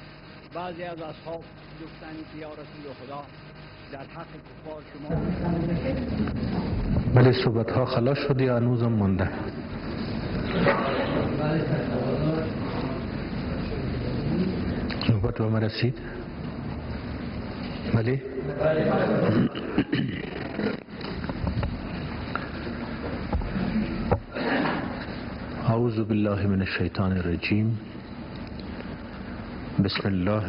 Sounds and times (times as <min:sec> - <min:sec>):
Male speech, man speaking: 0:00.5 - 0:03.3, 0:03.9 - 0:05.5, 0:07.1 - 0:09.5, 0:11.1 - 0:12.6, 0:15.0 - 0:16.2, 0:17.9 - 0:19.4, 0:25.6 - 0:27.8, 0:29.8 - 0:30.4.